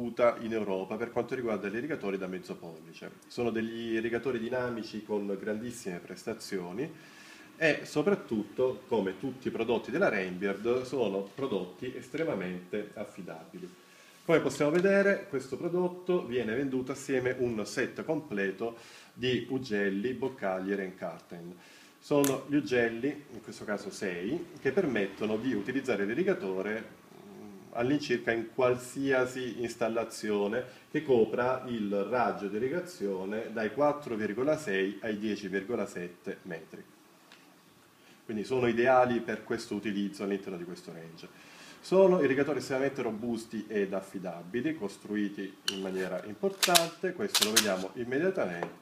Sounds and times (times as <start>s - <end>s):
Speech: 0.0s - 7.0s, 7.6s - 36.9s, 38.3s - 48.8s.